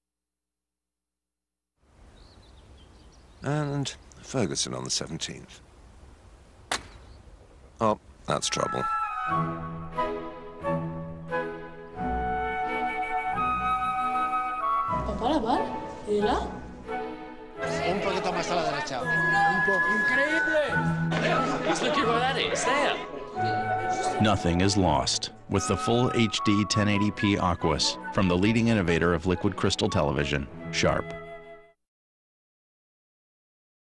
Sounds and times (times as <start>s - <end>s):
Speech: 3.4s - 5.6s, 24.2s - 31.1s
Music: 8.5s - 31.8s.